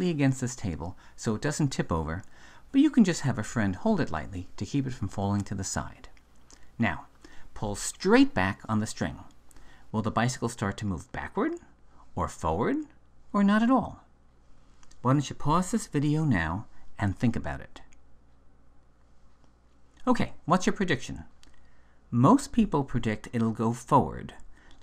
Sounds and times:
Speech: 0.0s - 6.2s, 6.8s - 14.1s, 15.0s - 18.0s, 20.0s - 21.4s, 22.1s - 24.4s.

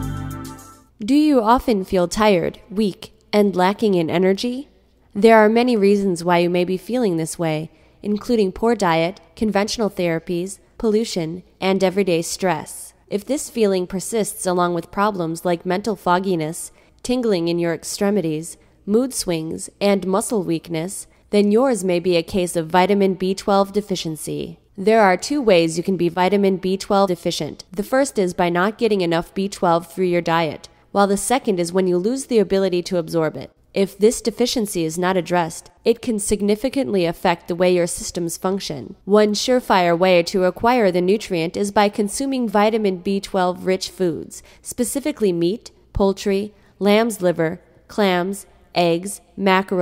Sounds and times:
Speech: 1.0s - 49.8s.

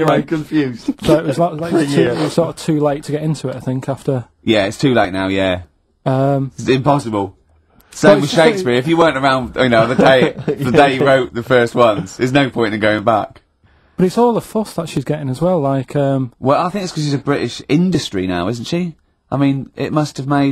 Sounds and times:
Speech: 0.0s - 7.4s, 8.0s - 20.5s.

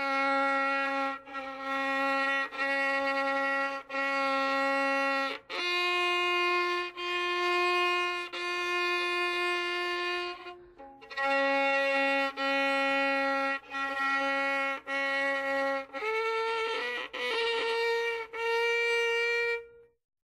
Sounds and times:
Violin, fiddle: 0.0s - 20.0s.

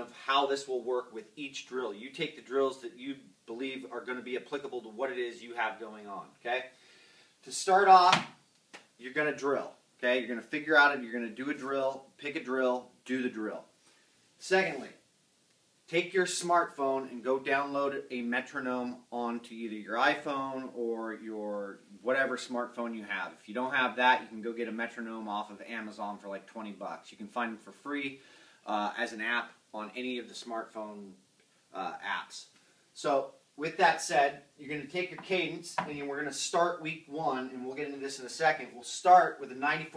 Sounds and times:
Speech: 0.0s - 6.8s, 7.4s - 8.2s, 9.0s - 13.7s, 14.4s - 15.0s, 15.9s - 39.9s
Inside, small room: 0.0s - 39.9s.

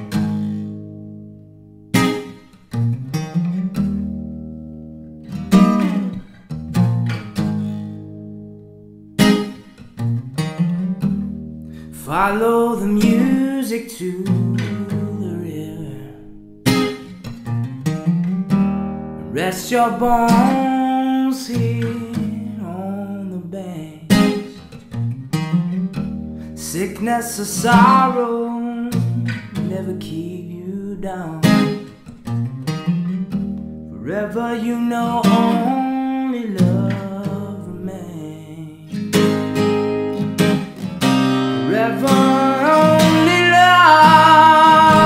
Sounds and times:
Music: 0.0s - 45.0s.

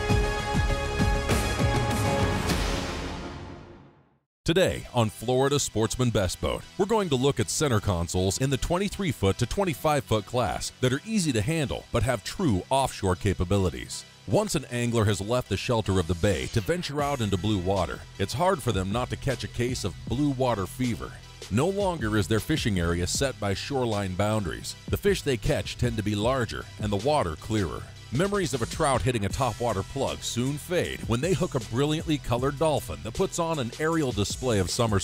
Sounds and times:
Music: 0.0s - 35.0s
Speech: 4.5s - 35.0s.

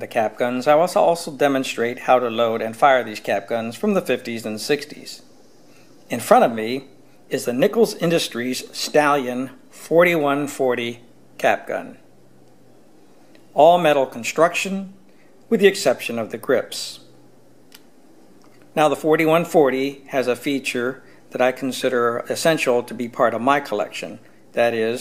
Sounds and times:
Speech: 0.0s - 5.3s, 6.1s - 12.1s, 13.6s - 17.1s, 18.8s - 25.0s.

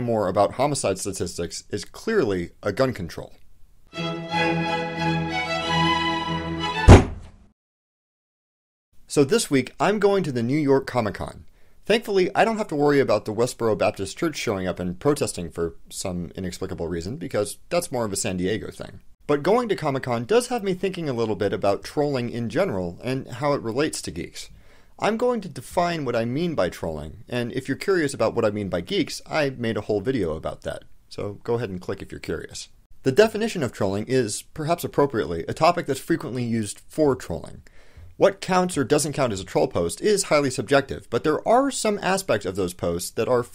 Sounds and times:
Speech: 0.0s - 3.4s, 9.1s - 43.5s.

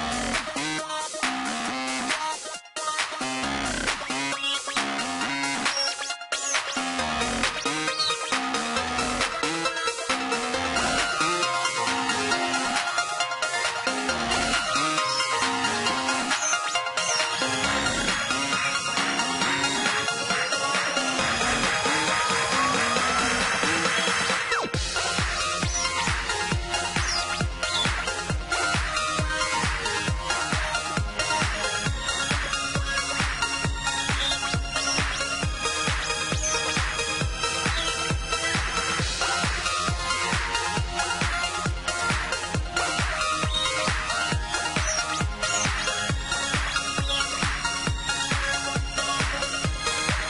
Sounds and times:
Music: 0.0s - 50.2s.

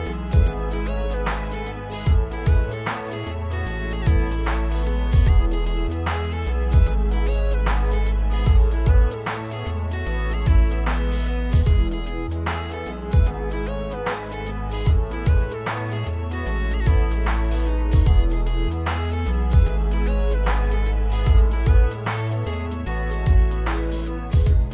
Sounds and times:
Music: 0.0s - 24.7s.

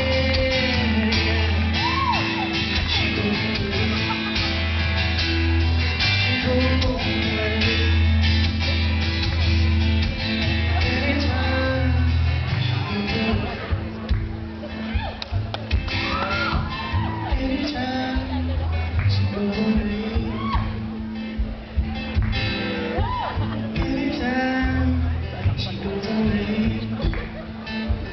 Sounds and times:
Singing: 0.0s - 4.3s, 10.7s - 13.8s, 16.1s - 21.0s, 23.4s - 27.4s
Inside, large room or hall: 0.0s - 28.1s
Music: 0.0s - 28.1s.

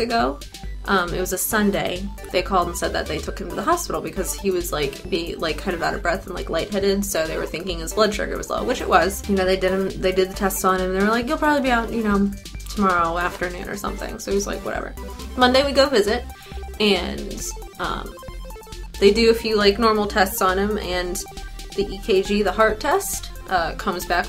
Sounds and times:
Speech: 0.0s - 16.2s, 16.8s - 18.1s, 19.0s - 24.2s
Music: 0.0s - 24.2s.

